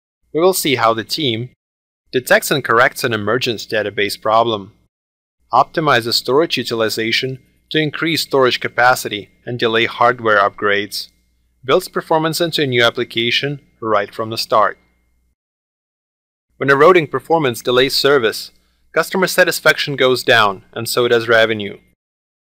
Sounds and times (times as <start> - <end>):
Speech: 0.4 - 1.6, 2.2 - 4.8, 5.5 - 14.8, 16.6 - 22.0.